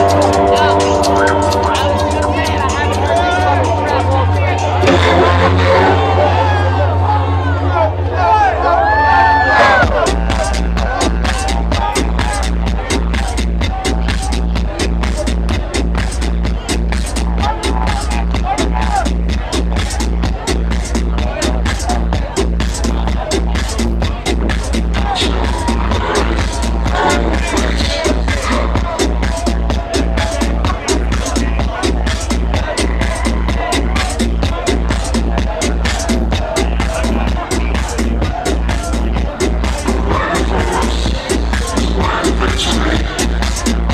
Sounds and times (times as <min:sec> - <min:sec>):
Dance music: 0:00.0 - 0:43.9
Exciting music: 0:00.0 - 0:43.9.